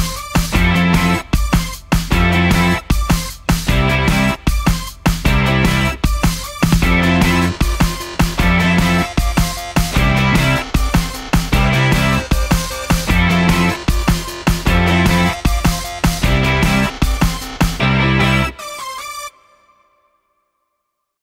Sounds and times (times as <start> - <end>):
Music: 0.0 - 20.8.